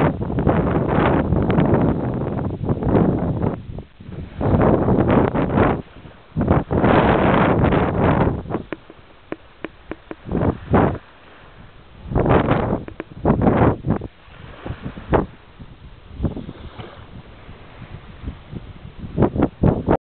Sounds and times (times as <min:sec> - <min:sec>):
Wind noise (microphone): 0:00.0 - 0:20.0.